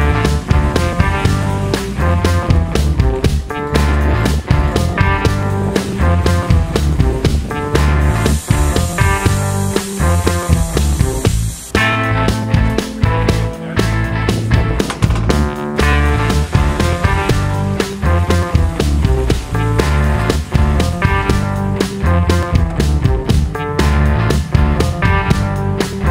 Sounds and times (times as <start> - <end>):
Music: 0.0 - 26.1.